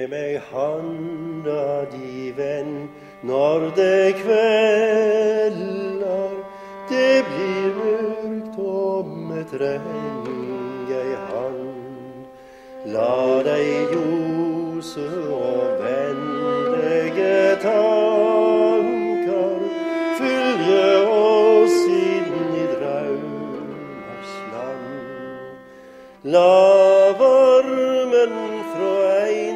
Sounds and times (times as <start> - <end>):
Bowed string instrument: 0.0 - 29.5.